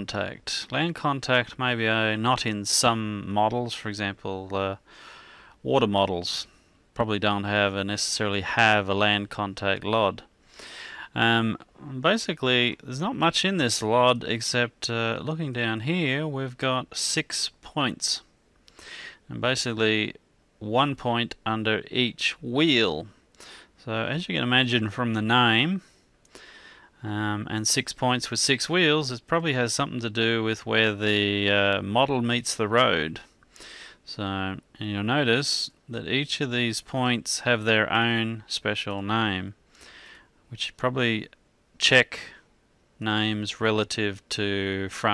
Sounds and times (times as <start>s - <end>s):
Speech: 0.0s - 4.8s, 5.6s - 10.3s, 11.1s - 18.3s, 19.3s - 23.2s, 23.8s - 25.9s, 27.0s - 33.3s, 34.1s - 39.6s, 40.5s - 42.4s, 43.0s - 45.1s.